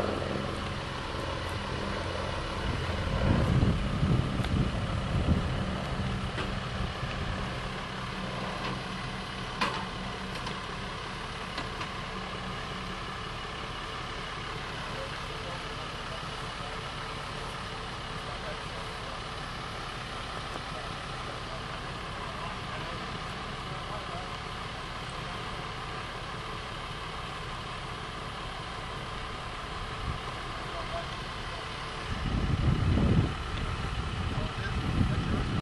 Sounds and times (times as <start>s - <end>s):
Speech: 14.8s - 17.0s, 18.2s - 19.0s, 20.5s - 24.4s, 30.6s - 31.8s, 34.2s - 35.6s.